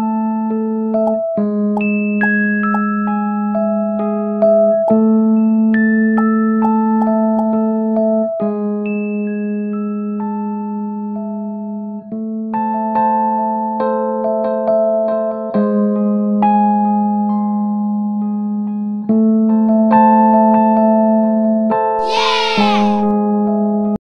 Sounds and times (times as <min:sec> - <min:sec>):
Music: 0:00.0 - 0:24.0.